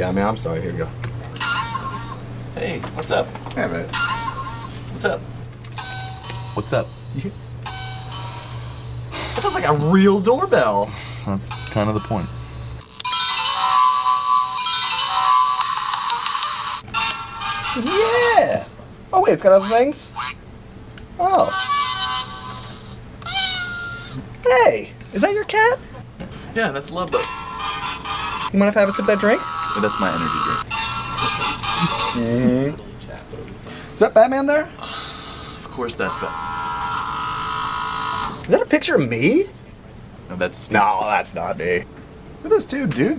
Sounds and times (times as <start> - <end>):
Inside, small room: 0.0 - 43.1
Music: 5.7 - 9.0, 11.5 - 18.2, 27.2 - 28.5, 29.4 - 32.3.